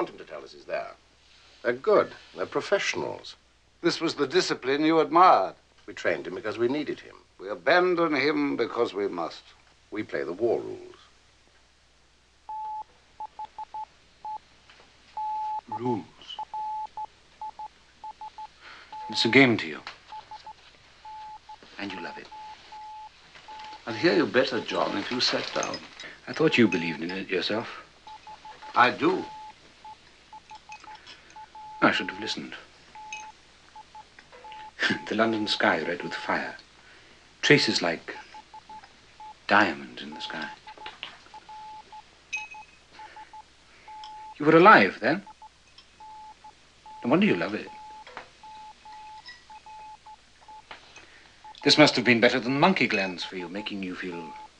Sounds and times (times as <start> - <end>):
Speech: 0.0 - 1.0, 1.6 - 11.1, 19.1 - 19.9, 21.8 - 22.3, 23.8 - 27.8, 28.8 - 29.3, 31.8 - 32.7, 34.8 - 36.6, 37.4 - 38.2, 39.5 - 40.6, 44.4 - 45.3, 47.0 - 47.8, 51.6 - 54.4.